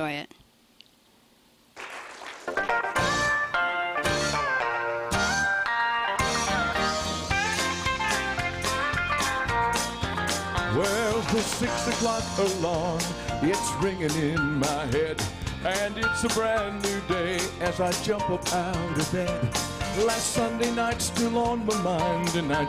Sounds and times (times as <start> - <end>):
Gospel music: 1.8 - 22.6
Male singing: 10.7 - 22.6.